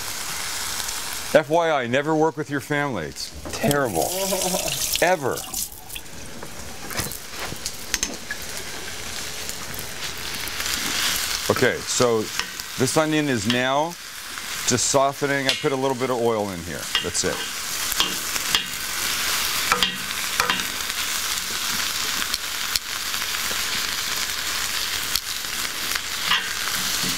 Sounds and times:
Frying (food): 0.0 - 27.1
Sizzle: 0.0 - 27.1.

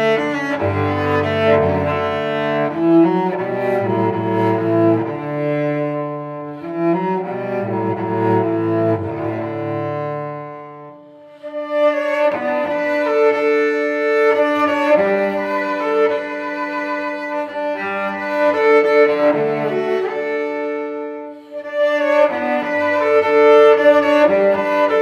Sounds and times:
Cello: 0.0 - 25.0
Violin, fiddle: 0.0 - 25.0.

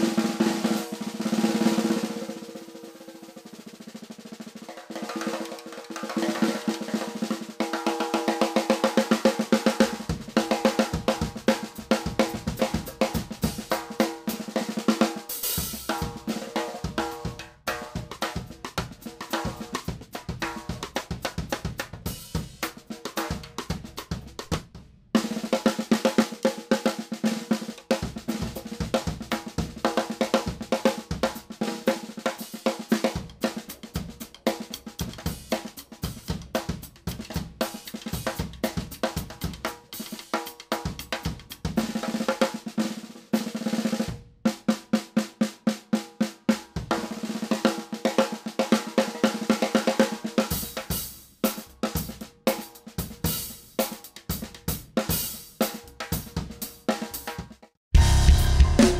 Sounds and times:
Drum kit: 0.0 - 58.9
Drum roll: 0.0 - 58.9.

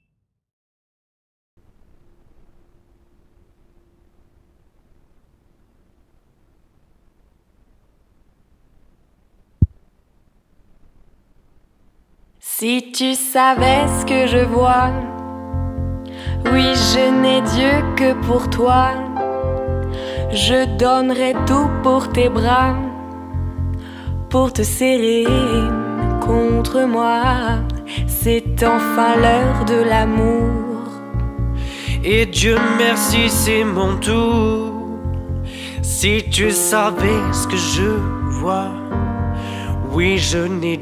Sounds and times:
Music: 12.6 - 40.8.

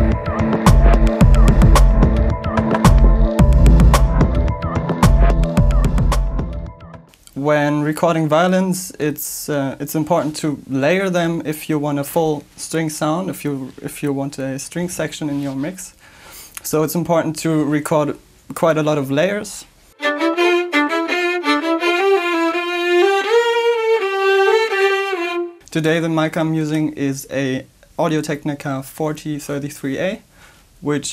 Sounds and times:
Speech: 7.3 - 16.0, 16.6 - 19.7, 25.7 - 30.2, 30.8 - 31.1.

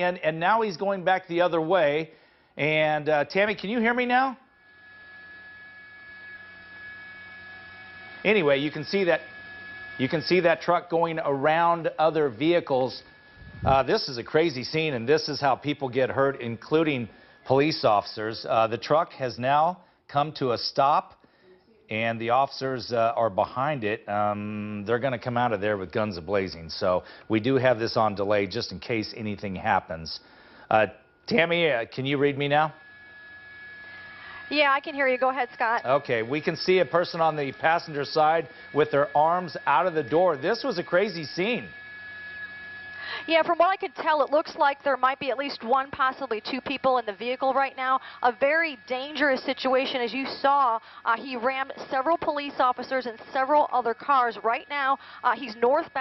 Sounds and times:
Speech: 8.3 - 9.2, 21.9 - 32.8, 34.5 - 41.7, 43.3 - 56.0.

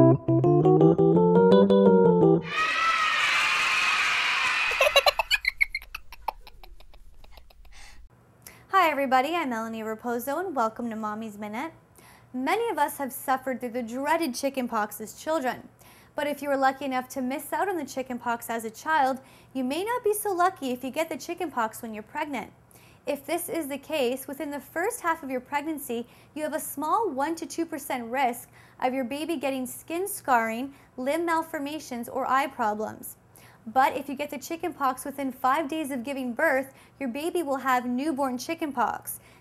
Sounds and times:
Speech: 8.7 - 11.8, 12.4 - 39.2.

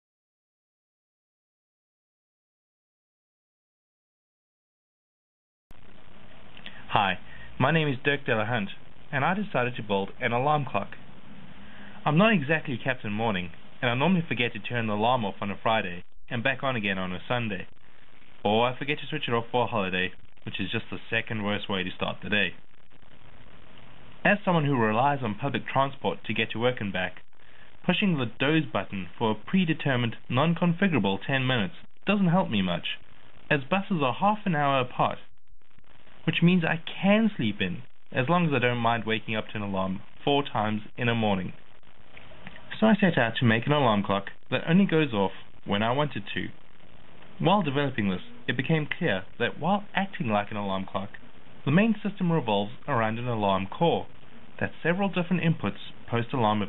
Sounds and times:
Speech: 6.6 - 11.0, 12.0 - 17.7, 18.4 - 22.6, 24.2 - 35.3, 36.2 - 41.6, 42.5 - 46.6, 47.4 - 56.6.

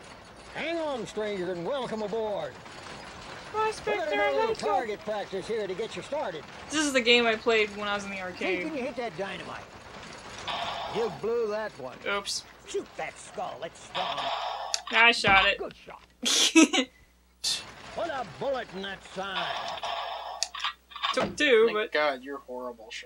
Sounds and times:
Speech: 0.6 - 2.6, 3.6 - 9.7, 11.0 - 14.2, 16.7 - 19.7, 21.2 - 23.0.

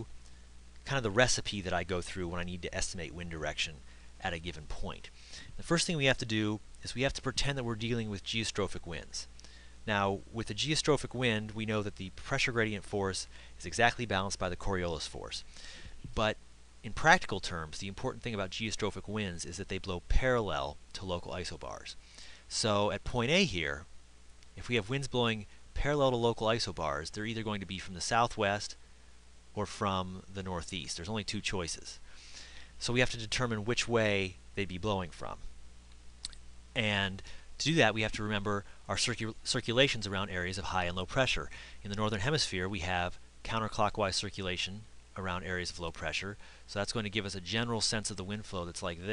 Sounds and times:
Speech: 0.8 - 15.5, 16.1 - 23.9, 24.6 - 28.8, 29.6 - 32.0, 32.8 - 35.5, 36.3 - 49.1.

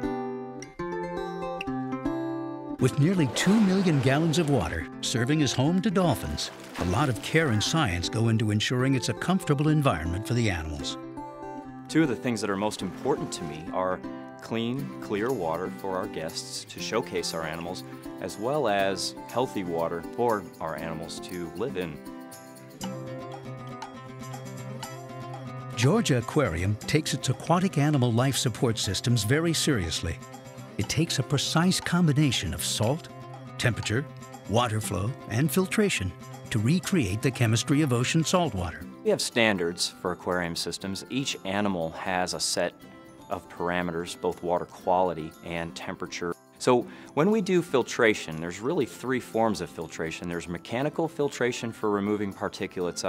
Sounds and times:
Music: 0.0 - 53.0
Speech: 2.8 - 11.0, 11.9 - 22.0, 25.8 - 30.2, 30.8 - 53.0.

